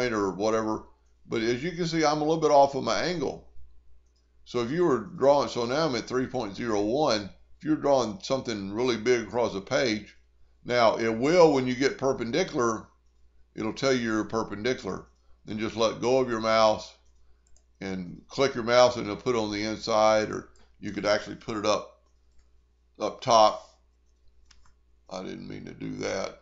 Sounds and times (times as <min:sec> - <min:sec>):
Speech: 0:00.0 - 0:03.4, 0:04.5 - 0:10.1, 0:10.7 - 0:12.9, 0:13.6 - 0:17.0, 0:17.8 - 0:21.8, 0:23.0 - 0:23.6, 0:25.1 - 0:26.4.